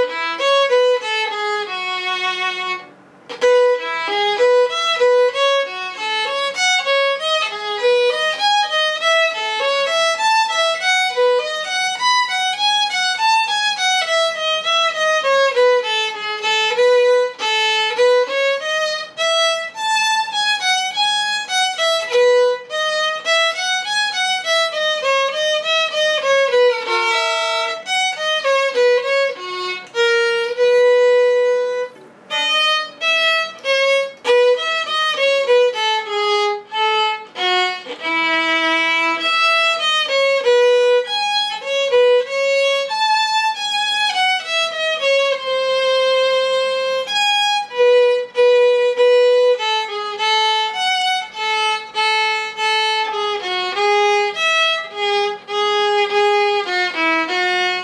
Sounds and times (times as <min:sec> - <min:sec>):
Violin, fiddle: 0:00.0 - 0:57.8.